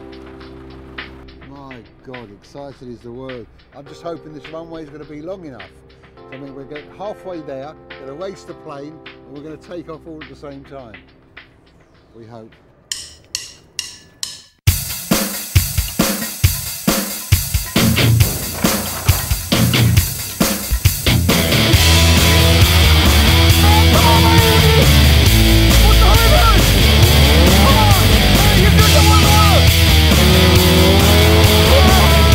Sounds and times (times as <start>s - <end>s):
Music: 0.0s - 32.3s
Speech: 1.4s - 11.1s, 12.2s - 12.6s, 27.5s - 29.6s.